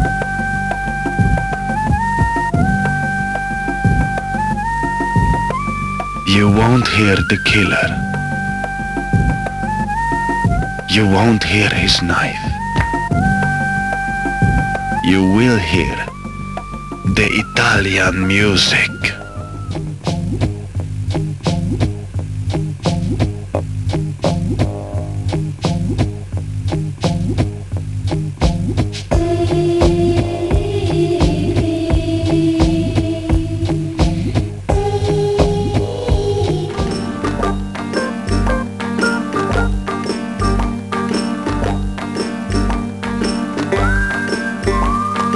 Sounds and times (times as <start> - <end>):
Music: 0.0 - 45.3
Speech: 6.3 - 8.0, 10.9 - 12.6, 15.0 - 16.1, 17.1 - 19.2.